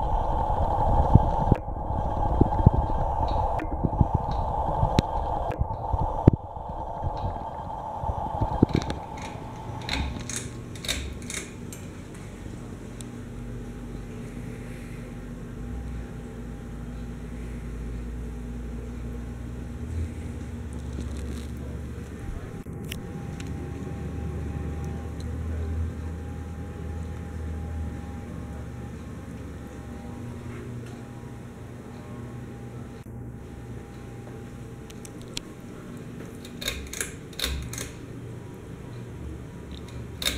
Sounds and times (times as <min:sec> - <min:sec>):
Mechanical fan: 0:00.0 - 0:40.3.